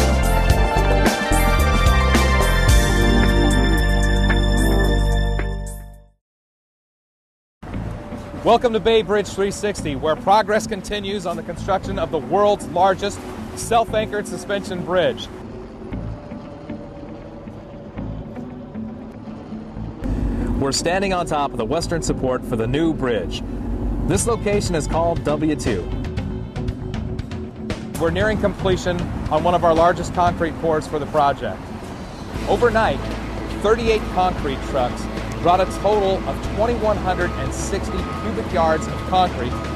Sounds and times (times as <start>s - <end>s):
Music: 0.0s - 6.2s, 7.6s - 39.7s
Speech: 8.4s - 15.3s, 20.6s - 23.4s, 24.1s - 26.0s, 28.0s - 31.6s, 32.4s - 33.0s, 33.6s - 39.6s.